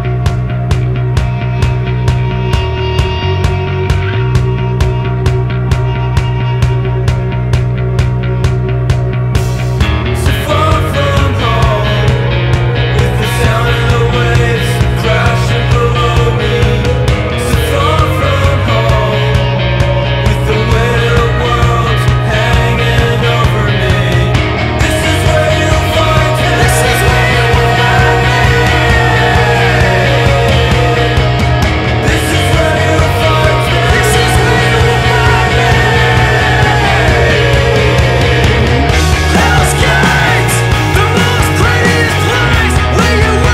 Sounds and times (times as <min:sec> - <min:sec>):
Music: 0:00.0 - 0:43.5.